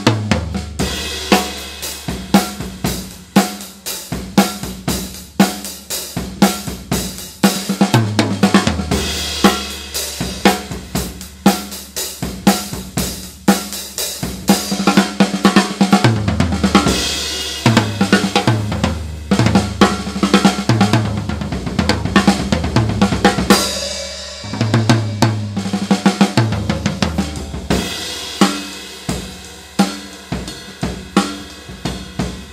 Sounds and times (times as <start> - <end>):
Bass drum: 0.0 - 32.5
Snare drum: 0.0 - 32.5.